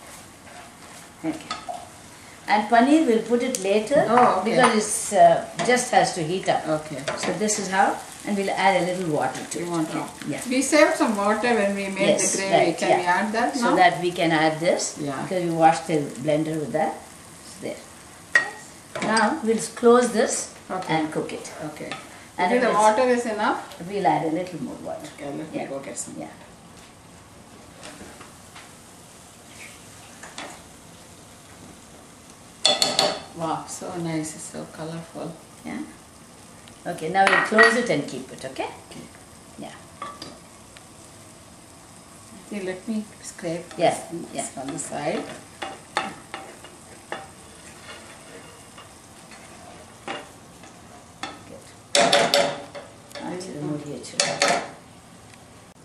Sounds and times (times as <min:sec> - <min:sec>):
Frying (food): 0:00.0 - 0:55.8
Sizzle: 0:00.0 - 0:55.8
Cutlery, silverware: 0:32.6 - 0:33.2, 0:52.0 - 0:52.9, 0:54.2 - 0:54.7.